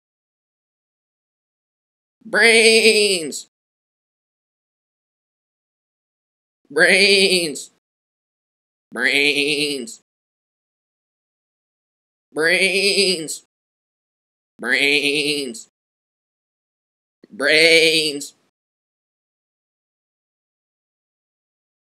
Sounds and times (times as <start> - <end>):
Speech: 2.2 - 3.5, 6.7 - 7.8, 8.9 - 10.0, 12.4 - 13.4, 14.6 - 15.6, 17.3 - 18.5.